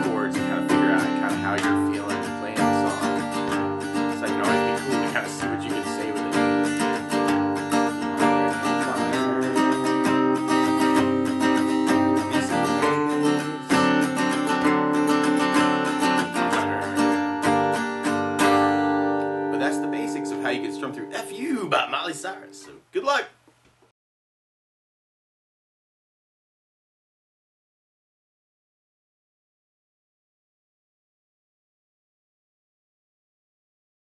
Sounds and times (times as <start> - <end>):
Steel guitar, slide guitar: 0.0 - 20.7
Strum: 0.0 - 22.8
Acoustic guitar: 0.0 - 23.3.